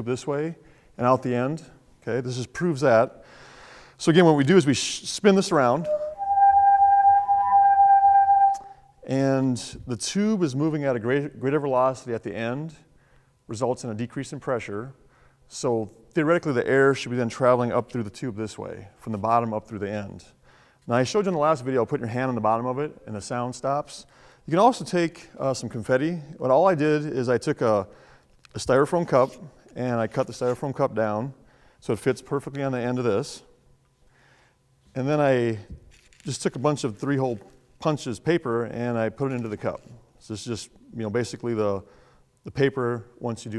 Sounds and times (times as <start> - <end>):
Speech: 0.0 - 3.2, 4.0 - 5.9, 9.1 - 12.9, 13.5 - 27.9, 28.6 - 33.5, 35.0 - 35.7, 36.3 - 41.9, 42.5 - 43.5.